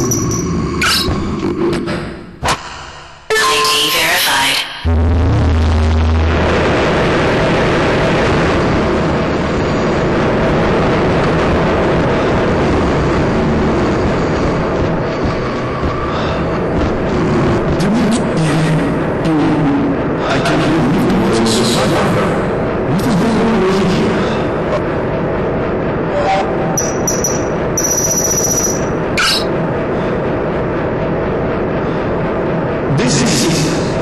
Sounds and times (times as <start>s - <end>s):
Speech: 3.3s - 4.8s, 17.8s - 24.2s, 32.9s - 34.0s.